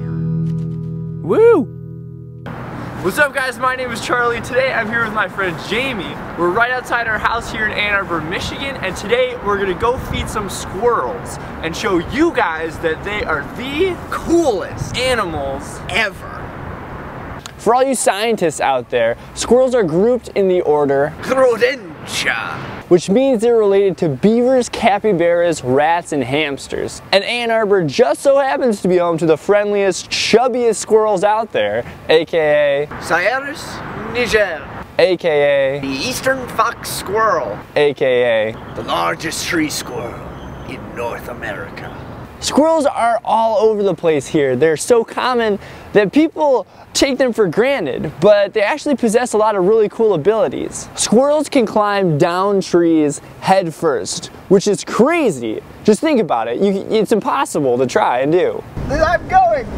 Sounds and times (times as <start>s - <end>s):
Speech: 3.0s - 16.4s, 17.6s - 59.7s.